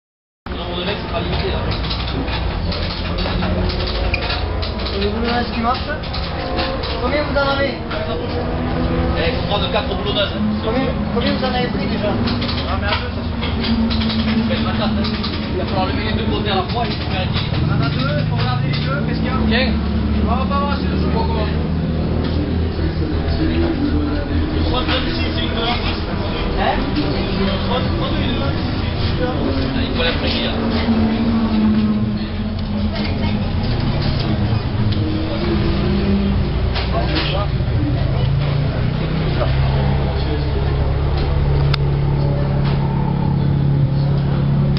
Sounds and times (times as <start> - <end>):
Speech: 0.5 - 3.8, 4.8 - 6.1, 6.9 - 8.4, 9.1 - 13.6, 14.3 - 21.8, 22.8 - 33.4, 36.8 - 41.0
Vehicle: 0.5 - 44.7.